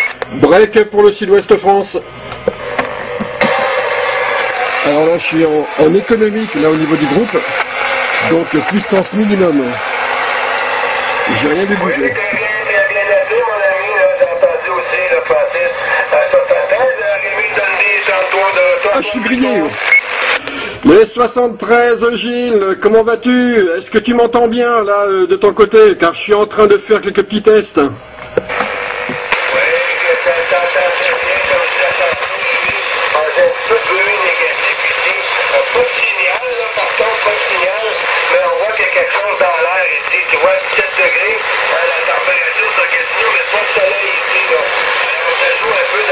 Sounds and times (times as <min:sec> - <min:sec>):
Radio: 0:00.0 - 0:24.5, 0:25.2 - 0:46.1
Speech: 0:00.3 - 0:02.0, 0:04.8 - 0:07.6, 0:08.2 - 0:09.8, 0:11.3 - 0:19.8, 0:20.8 - 0:28.0, 0:29.4 - 0:46.1.